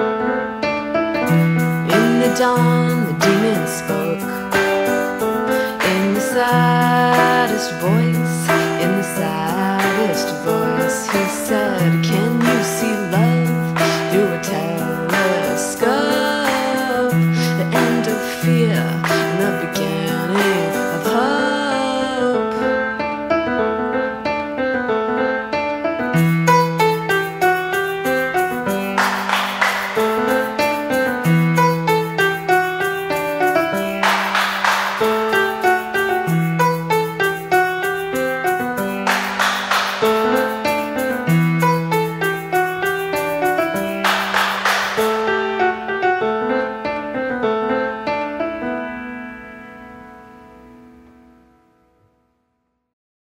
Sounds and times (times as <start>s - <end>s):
Electric piano: 0.0s - 52.4s.